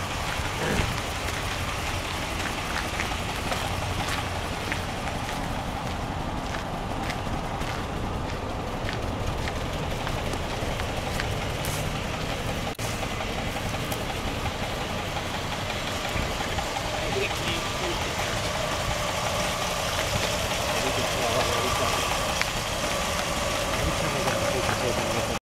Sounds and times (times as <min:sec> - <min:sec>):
Vehicle: 0:00.0 - 0:25.4
Speech: 0:00.6 - 0:00.9, 0:16.9 - 0:18.3, 0:20.7 - 0:22.2, 0:23.8 - 0:25.4.